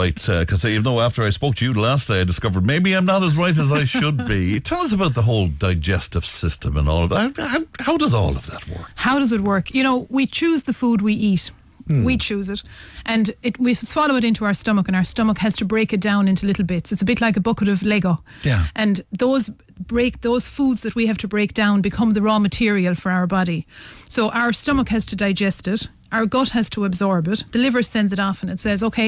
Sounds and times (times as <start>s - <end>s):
Speech: 0.0s - 29.0s.